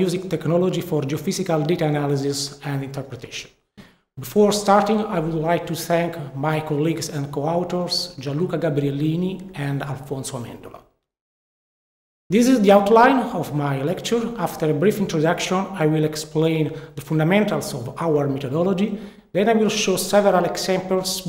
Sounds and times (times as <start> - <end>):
Speech: 0.0 - 3.5, 4.2 - 10.9, 12.3 - 21.2.